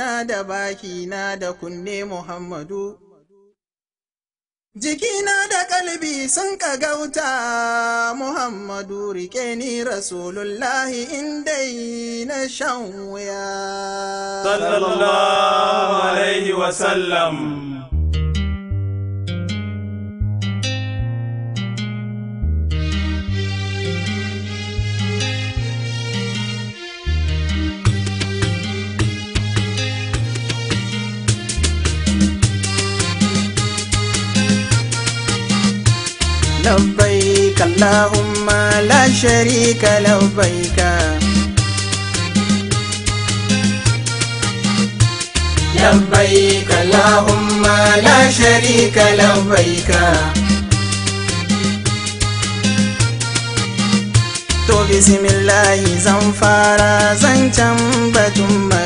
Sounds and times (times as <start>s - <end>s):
Music: 18.0s - 58.8s.